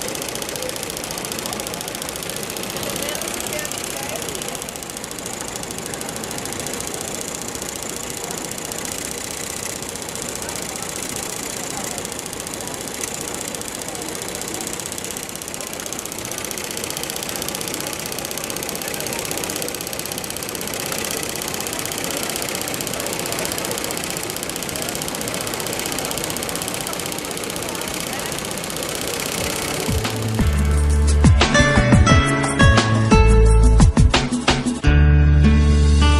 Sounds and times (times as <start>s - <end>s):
Speech: 0.0s - 30.1s
Sewing machine: 0.0s - 30.9s
Music: 29.9s - 36.1s.